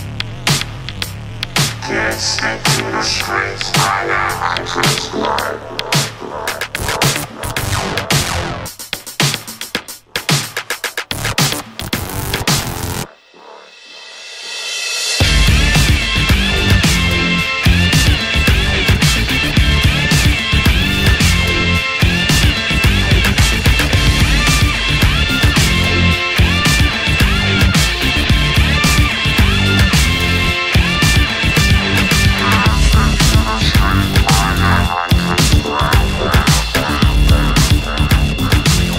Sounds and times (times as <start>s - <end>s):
Rhythm and blues: 0.0s - 14.6s, 15.2s - 38.9s
Blues: 15.2s - 38.9s.